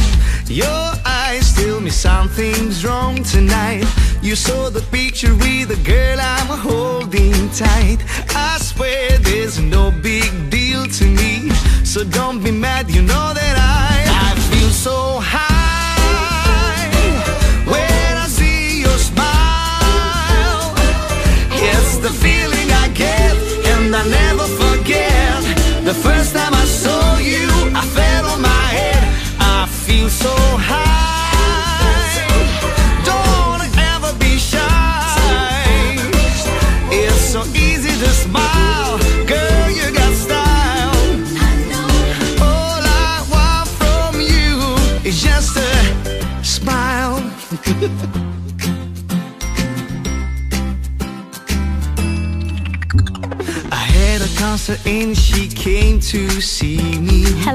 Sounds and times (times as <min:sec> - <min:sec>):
Music: 0:00.0 - 0:57.5.